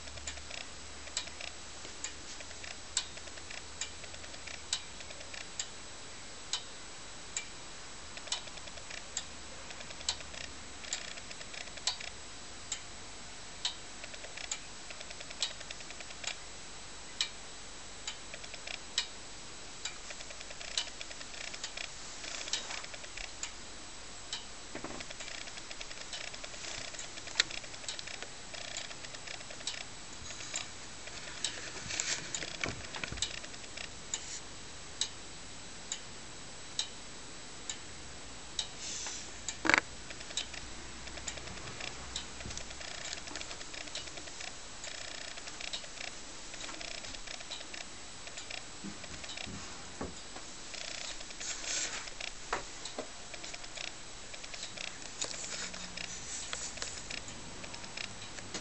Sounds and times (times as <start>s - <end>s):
Clock: 0.0s - 58.6s.